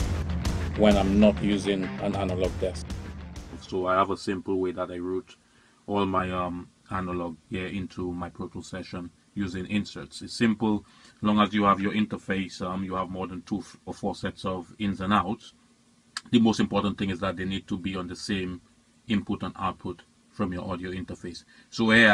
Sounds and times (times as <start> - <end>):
Speech: 0.8 - 2.8, 3.5 - 15.5, 16.2 - 22.1.